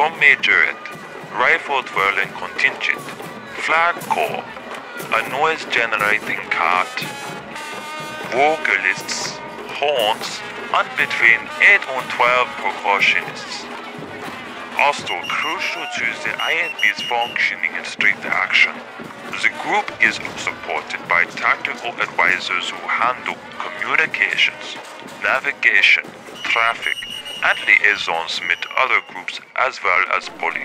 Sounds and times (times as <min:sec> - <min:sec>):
Speech: 0:00.0 - 0:07.1, 0:08.3 - 0:13.7, 0:14.8 - 0:30.6
Music: 0:00.0 - 0:30.6.